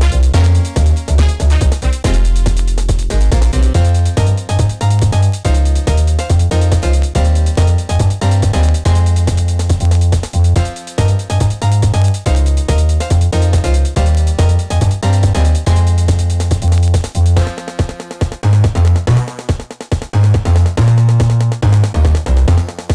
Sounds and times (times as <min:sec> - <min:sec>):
Background music: 0:00.0 - 0:22.9
Video game music: 0:00.0 - 0:22.9.